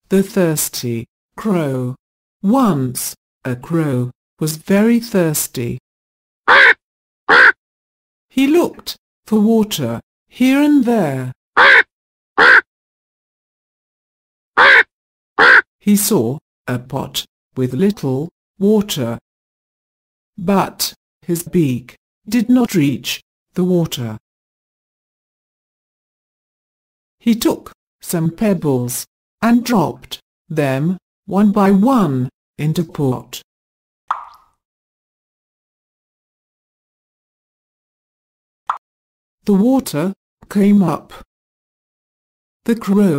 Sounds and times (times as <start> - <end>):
Speech: 0.0 - 5.8, 8.3 - 11.4, 15.8 - 19.2, 20.4 - 24.2, 27.2 - 33.5, 39.4 - 41.3, 42.7 - 43.1.